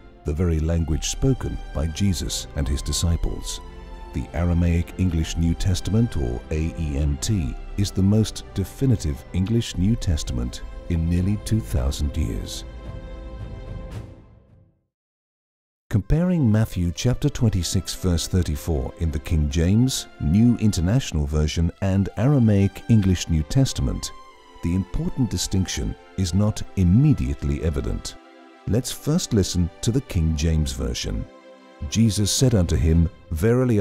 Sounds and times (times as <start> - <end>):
Music: 0.0 - 14.9, 15.9 - 33.8
Speech: 0.2 - 3.6, 4.2 - 12.6, 15.9 - 33.8.